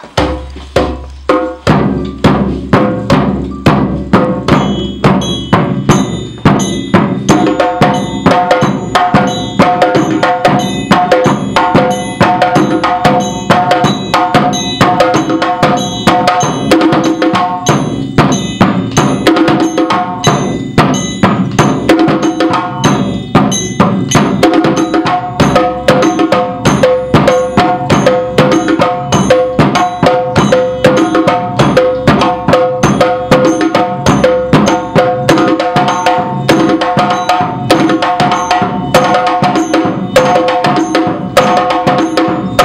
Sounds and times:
Wood block: 0.0 - 42.6.

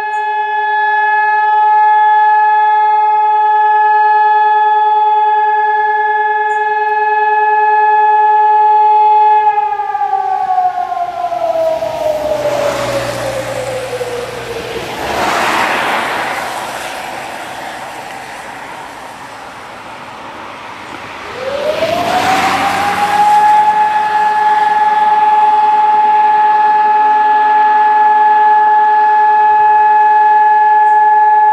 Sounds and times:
Vehicle: 0.0 - 31.5.

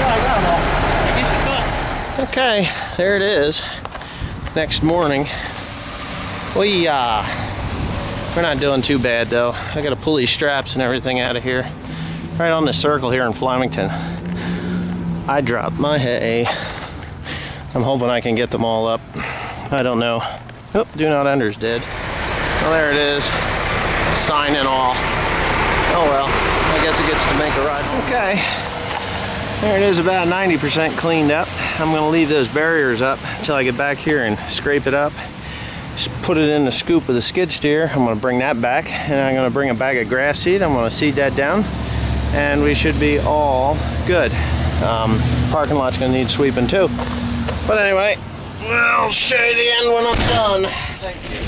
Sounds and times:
Truck: 0.0 - 17.6, 21.4 - 32.6, 38.8 - 51.4
Outside, urban or manmade: 0.0 - 51.4
Speech: 4.6 - 5.4, 8.4 - 11.7, 12.4 - 13.9, 22.6 - 23.4, 24.1 - 25.0, 25.9 - 28.6, 29.6 - 35.2, 42.3 - 46.9, 47.7 - 51.4.

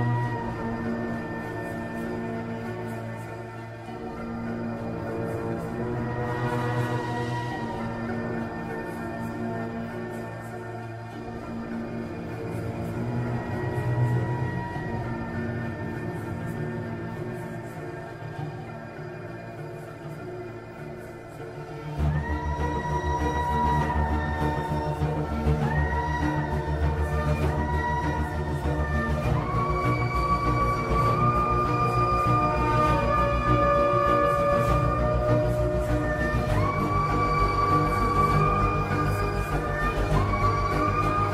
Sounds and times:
Music: 0.0 - 41.3.

